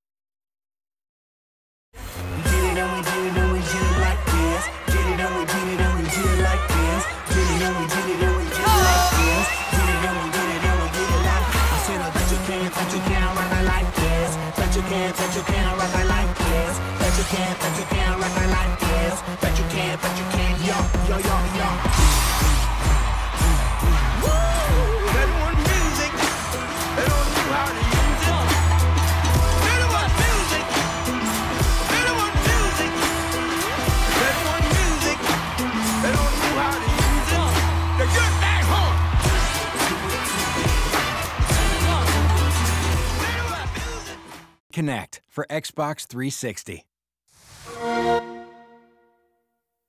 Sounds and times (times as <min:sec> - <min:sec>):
Dance music: 0:02.0 - 0:46.8
Disco: 0:02.5 - 0:44.4.